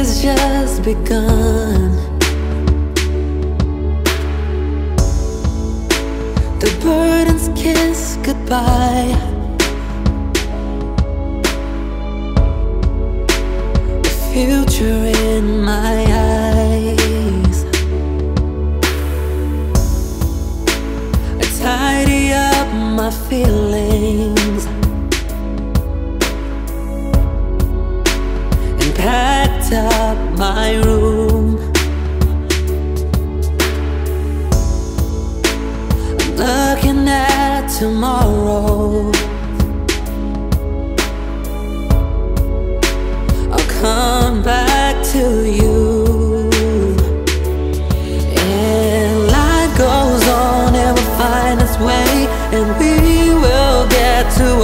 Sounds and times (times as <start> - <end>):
Music: 0.0 - 54.6.